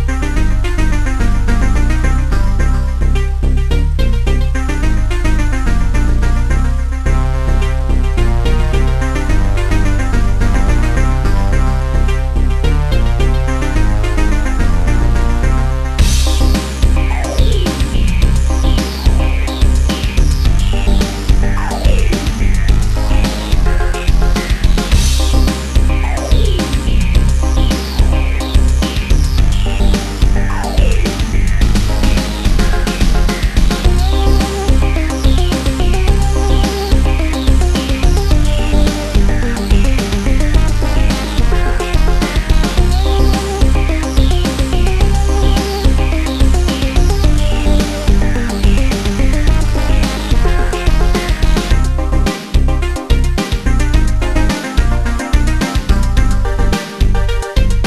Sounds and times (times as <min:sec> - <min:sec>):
Funk: 0:15.5 - 0:57.8.